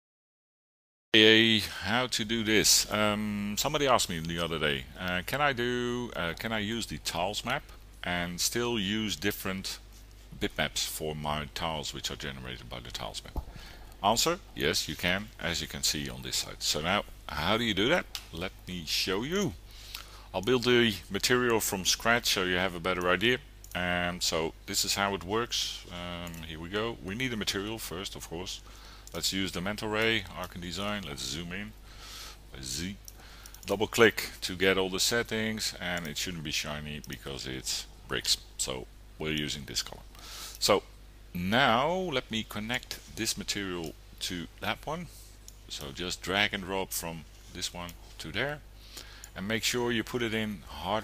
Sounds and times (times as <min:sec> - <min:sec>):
Speech: 0:01.2 - 0:13.4, 0:14.0 - 0:19.6, 0:20.3 - 0:31.8, 0:32.5 - 0:33.0, 0:33.7 - 0:48.7, 0:49.4 - 0:51.0.